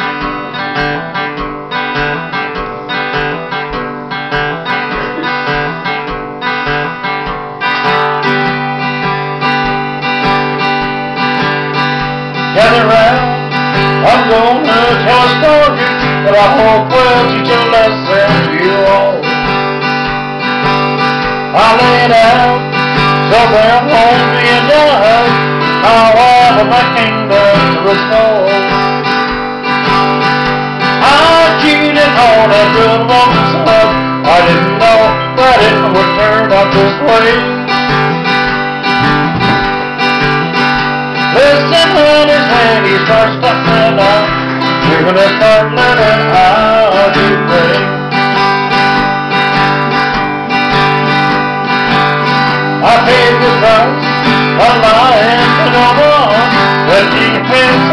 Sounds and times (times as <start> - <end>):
Acoustic guitar: 0.0 - 57.9
Bass guitar: 0.0 - 57.9
Electric guitar: 0.0 - 57.9.